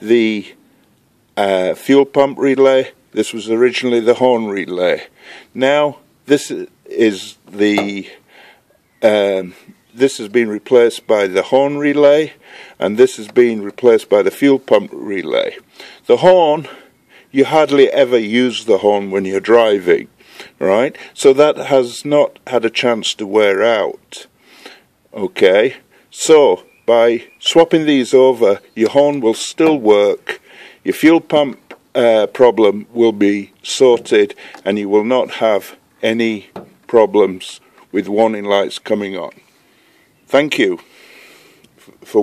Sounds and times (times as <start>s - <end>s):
Speech: 0.0s - 0.6s, 1.4s - 8.2s, 9.0s - 24.3s, 25.1s - 39.4s, 40.3s - 40.9s, 42.0s - 42.2s
Outside, rural or natural: 0.0s - 42.2s.